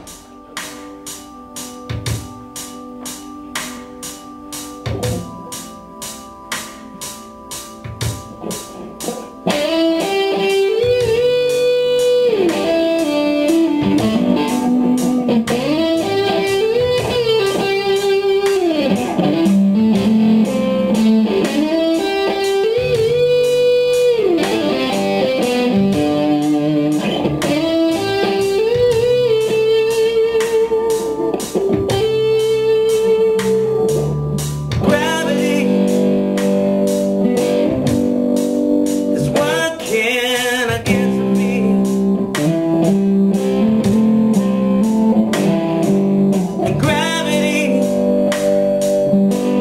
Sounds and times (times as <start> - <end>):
Tapping (guitar technique): 1.8 - 5.7, 7.8 - 49.6.